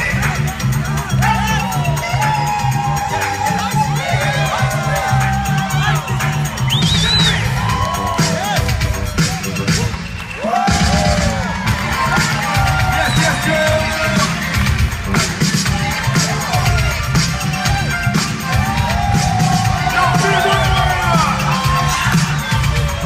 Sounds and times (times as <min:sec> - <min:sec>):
Music: 0:00.0 - 0:23.0.